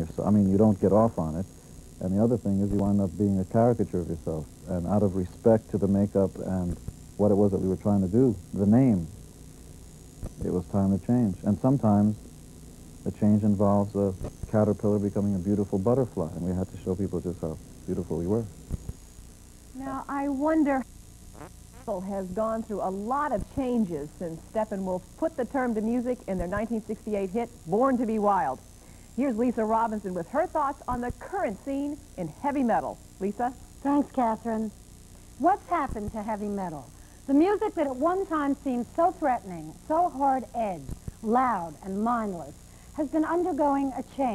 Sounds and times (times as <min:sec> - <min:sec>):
Speech: 0:00.0 - 0:09.1, 0:10.4 - 0:12.2, 0:13.1 - 0:18.5, 0:19.8 - 0:20.8, 0:21.9 - 0:28.6.